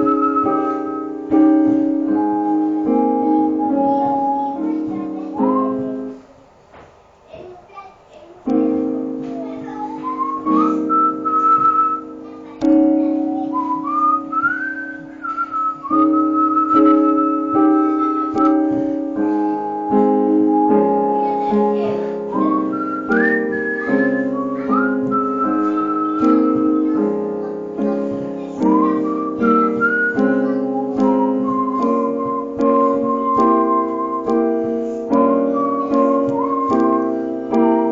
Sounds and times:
Whistling: 0:00.0 - 0:01.2, 0:05.4 - 0:06.1, 0:09.9 - 0:12.2, 0:13.2 - 0:18.6, 0:19.2 - 0:27.0, 0:28.6 - 0:37.9
Music: 0:00.0 - 0:06.2, 0:08.5 - 0:37.9.

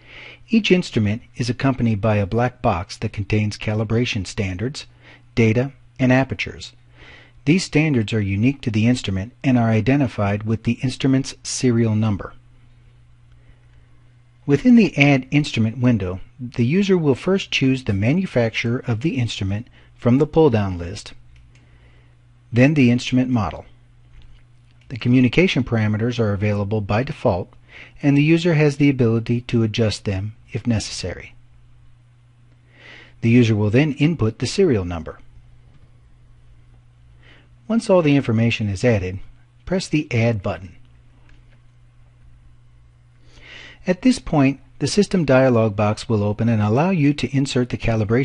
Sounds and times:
Speech: 0:00.5 - 0:06.8, 0:07.4 - 0:12.4, 0:14.5 - 0:21.2, 0:22.5 - 0:23.8, 0:24.9 - 0:31.4, 0:33.2 - 0:35.3, 0:37.7 - 0:40.8, 0:43.8 - 0:48.2.

